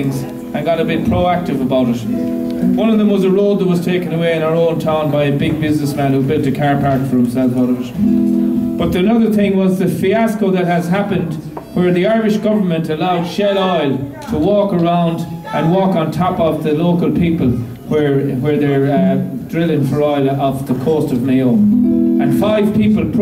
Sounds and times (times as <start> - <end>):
Speech: 0.0 - 2.1, 2.8 - 8.0, 8.8 - 21.6, 22.2 - 23.2
Music: 0.0 - 4.0, 7.8 - 9.4, 21.3 - 23.2.